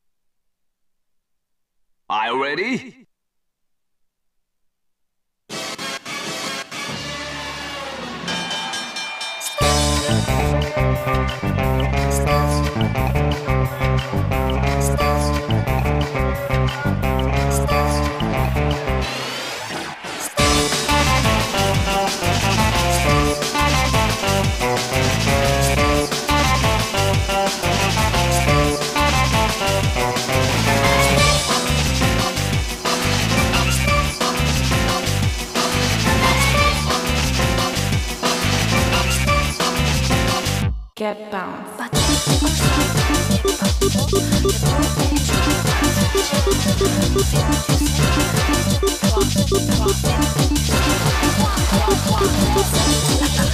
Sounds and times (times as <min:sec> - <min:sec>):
Pop music: 0:08.2 - 0:40.8, 0:41.9 - 0:53.5.